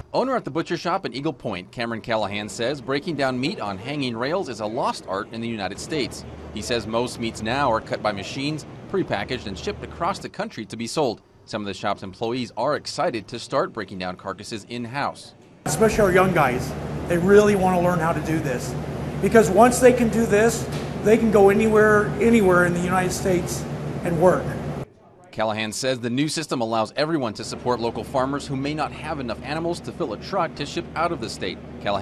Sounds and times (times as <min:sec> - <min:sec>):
Speech: 0:00.0 - 0:32.0.